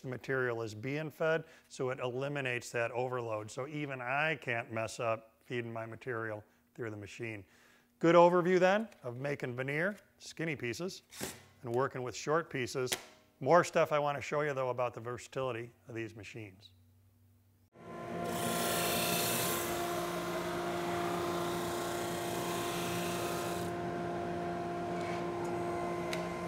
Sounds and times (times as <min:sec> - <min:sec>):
Power tool: 0:17.8 - 0:26.4.